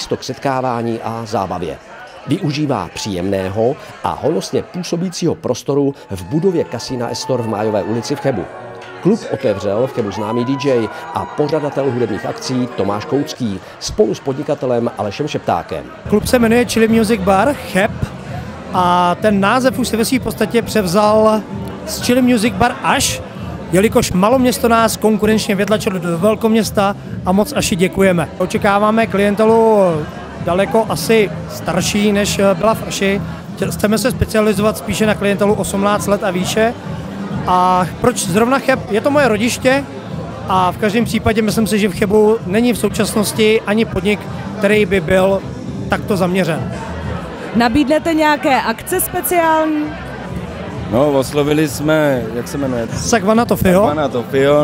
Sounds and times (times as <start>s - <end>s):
Speech: 0.0s - 36.8s.